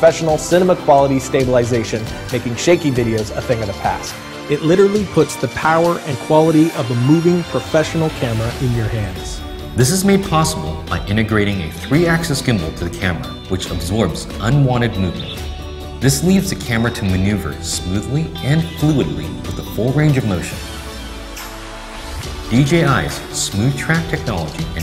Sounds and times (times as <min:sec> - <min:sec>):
Speech: 0:00.0 - 0:15.4, 0:16.0 - 0:20.6, 0:22.5 - 0:24.8
Music: 0:00.0 - 0:24.8.